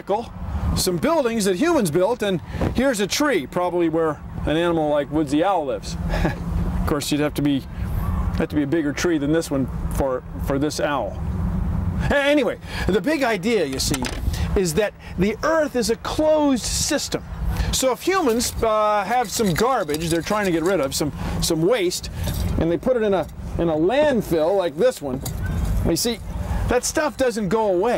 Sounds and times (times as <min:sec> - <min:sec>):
Speech: 0:00.0 - 0:06.0, 0:06.9 - 0:07.7, 0:08.4 - 0:11.2, 0:12.1 - 0:25.2, 0:25.8 - 0:27.9.